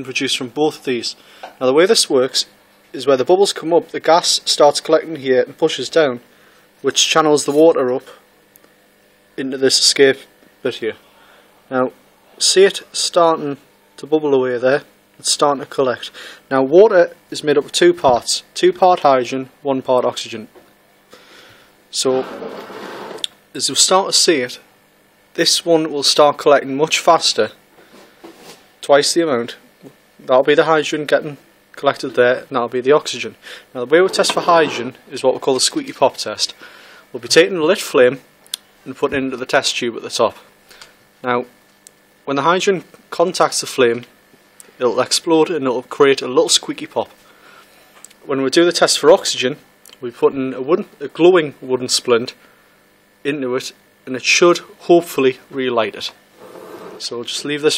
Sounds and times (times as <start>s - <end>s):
Speech: 0.0s - 8.2s, 9.4s - 11.0s, 11.7s - 20.6s, 21.9s - 22.4s, 23.5s - 24.7s, 25.4s - 27.6s, 28.8s - 38.2s, 38.8s - 40.5s, 41.2s - 41.6s, 42.3s - 44.1s, 44.8s - 47.2s, 48.2s - 52.4s, 53.2s - 56.2s, 57.0s - 57.7s.